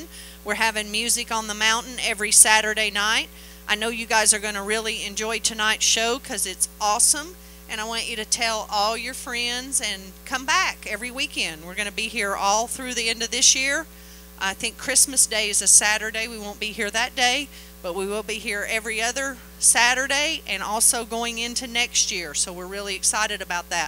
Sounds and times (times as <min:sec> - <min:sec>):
Speech: 0:00.0 - 0:23.8.